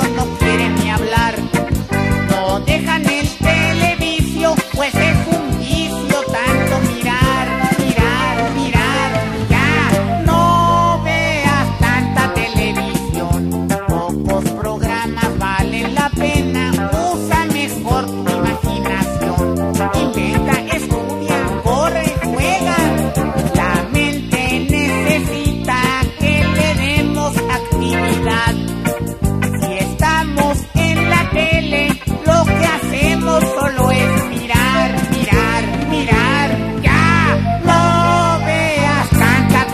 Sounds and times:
Music: 0:00.0 - 0:39.7.

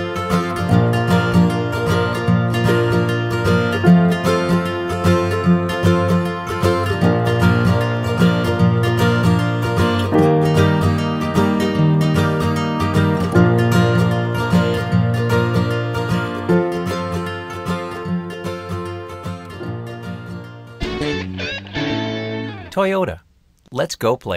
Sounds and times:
Music: 0:00.0 - 0:22.8
Speech: 0:22.7 - 0:24.3.

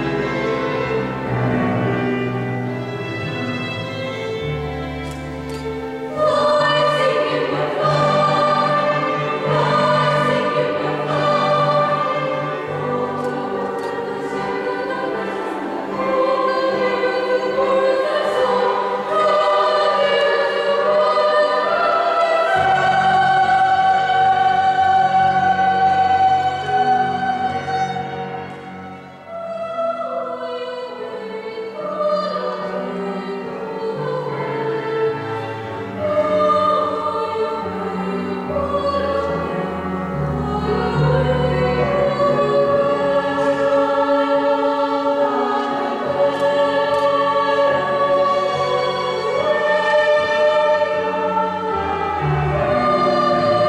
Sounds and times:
Music: 0:00.0 - 0:53.6.

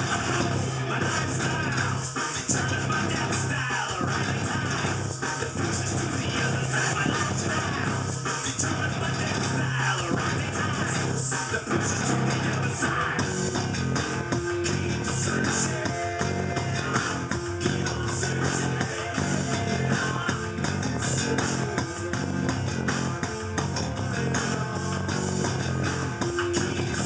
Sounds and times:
Guitar: 0:00.0 - 0:27.0.

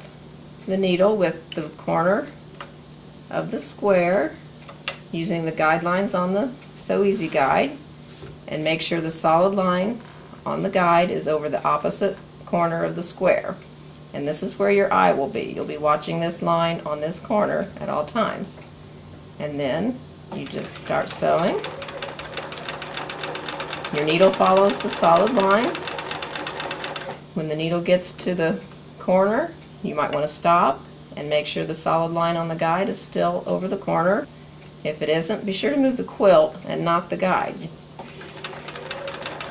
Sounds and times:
Speech: 0:00.7 - 0:02.4, 0:03.3 - 0:04.4, 0:05.1 - 0:07.8, 0:08.5 - 0:13.6, 0:14.2 - 0:18.7, 0:19.4 - 0:21.7, 0:23.9 - 0:25.8, 0:27.4 - 0:37.8
Sewing machine: 0:20.4 - 0:27.2, 0:38.0 - 0:39.5.

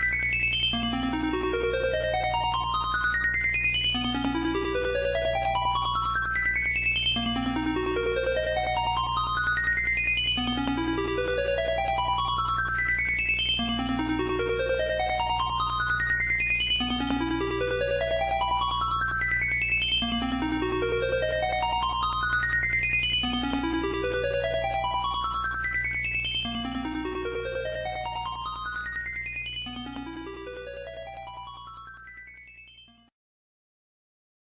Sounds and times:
Video game music: 0:00.0 - 0:33.1.

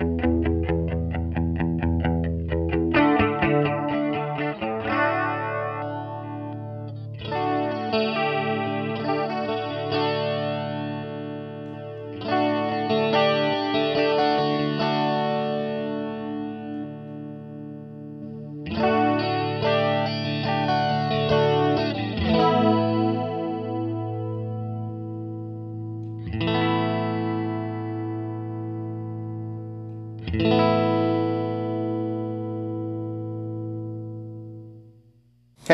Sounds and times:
Distortion: 0:00.0 - 0:35.7
Effects unit: 0:00.0 - 0:35.7
Guitar: 0:00.0 - 0:35.7.

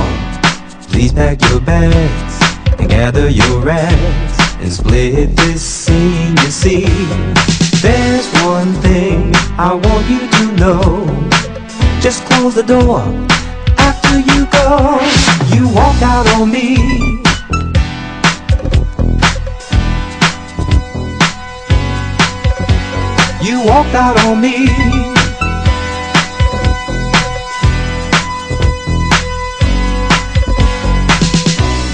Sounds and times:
Funk: 0:00.0 - 0:31.9.

